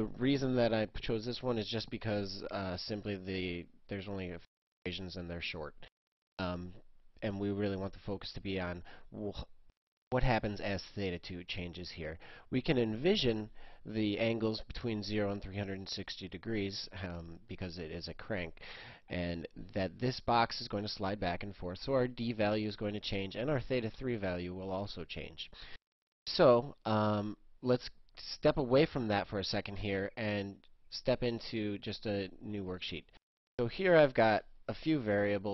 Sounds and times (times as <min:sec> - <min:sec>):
Speech: 0:00.0 - 0:09.5, 0:10.2 - 0:25.6, 0:26.3 - 0:35.5.